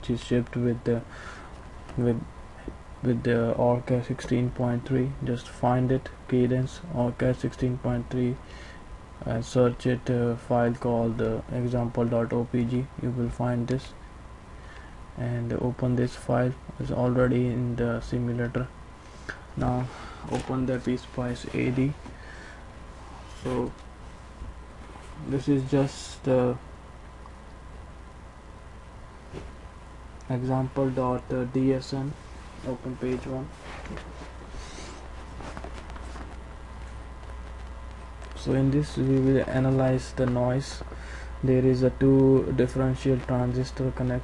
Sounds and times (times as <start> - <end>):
Speech: 0.0 - 1.1, 2.0 - 2.3, 3.0 - 8.4, 9.2 - 14.0, 15.2 - 18.8, 19.6 - 22.0, 23.4 - 23.8, 25.2 - 26.6, 30.3 - 33.6, 38.4 - 44.2.